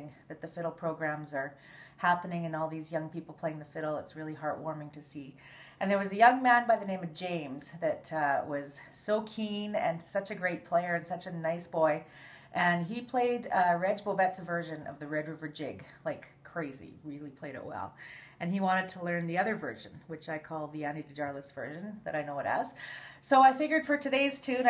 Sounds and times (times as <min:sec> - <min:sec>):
Speech: 0:00.0 - 0:12.0, 0:12.6 - 0:24.6.